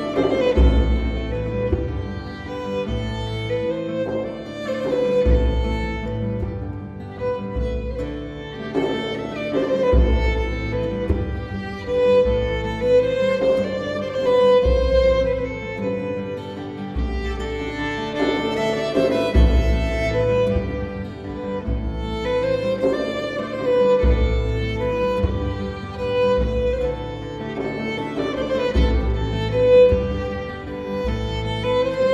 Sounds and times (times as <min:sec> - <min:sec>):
Bowed string instrument: 0:00.0 - 0:32.1.